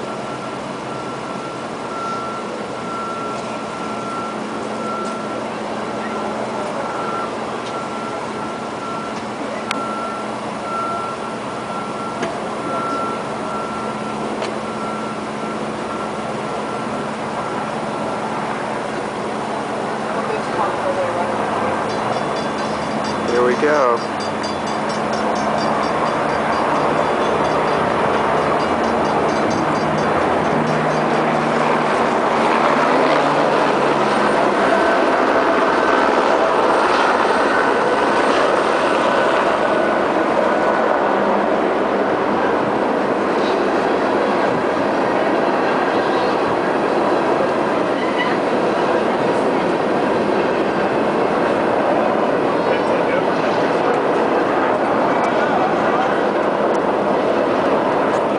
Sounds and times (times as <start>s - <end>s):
Train: 0.0s - 58.3s.